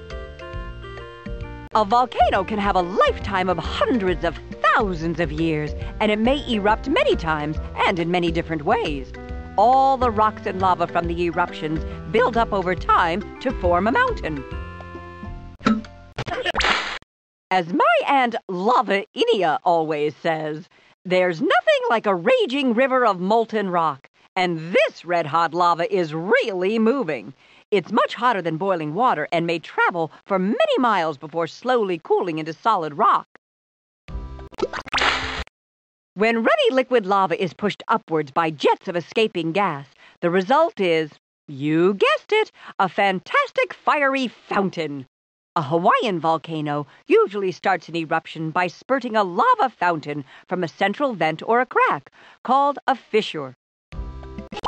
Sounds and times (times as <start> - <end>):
Music: 0.0 - 16.2, 34.1 - 34.8, 53.9 - 54.6
Speech: 1.8 - 14.4, 17.5 - 33.4, 36.2 - 53.6.